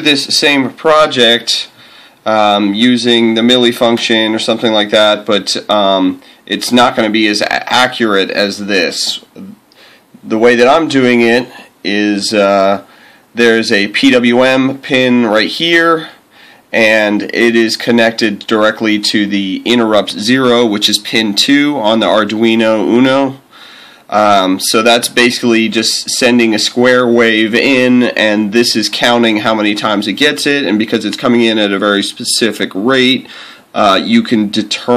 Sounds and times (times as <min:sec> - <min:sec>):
Speech: 0:00.0 - 0:09.6, 0:10.2 - 0:23.5, 0:24.1 - 0:34.9.